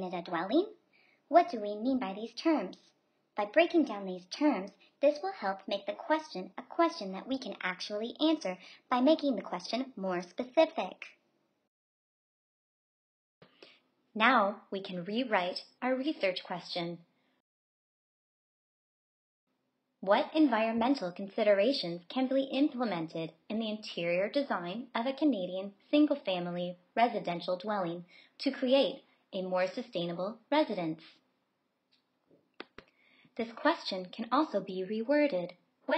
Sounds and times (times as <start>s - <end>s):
Speech: 0.0s - 11.2s, 14.2s - 17.1s, 20.0s - 31.2s, 33.4s - 35.9s.